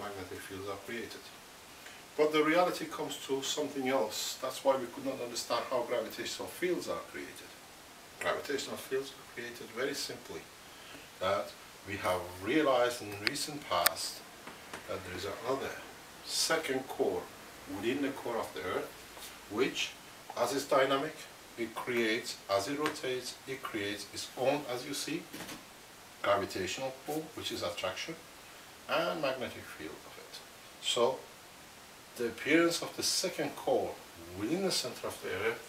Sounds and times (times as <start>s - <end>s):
Speech: 0.0s - 1.4s, 2.2s - 7.6s, 8.2s - 10.5s, 11.2s - 14.3s, 14.9s - 25.3s, 26.2s - 28.3s, 28.9s - 31.3s, 32.2s - 35.6s.